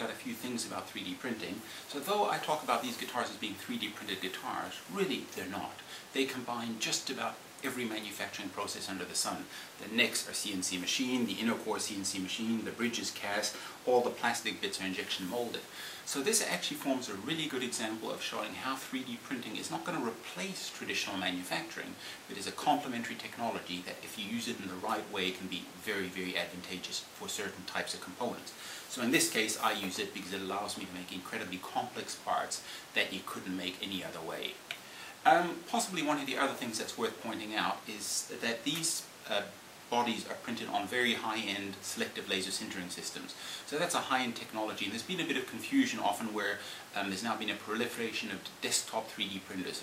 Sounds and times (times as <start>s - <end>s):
Speech: 0.0s - 49.8s.